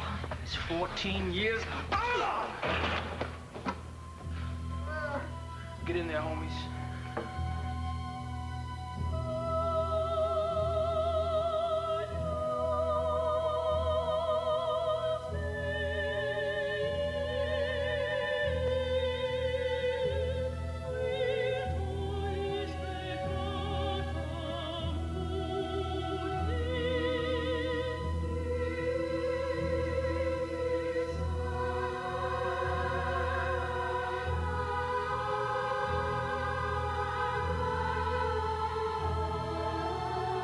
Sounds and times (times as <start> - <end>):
Opera: 0.0 - 40.4.